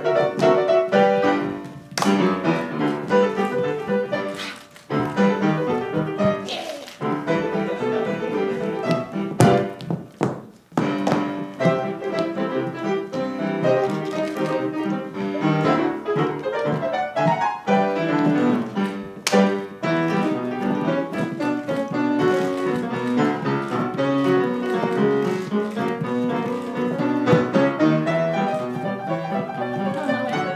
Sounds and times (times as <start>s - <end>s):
Classical music: 0.0s - 30.5s.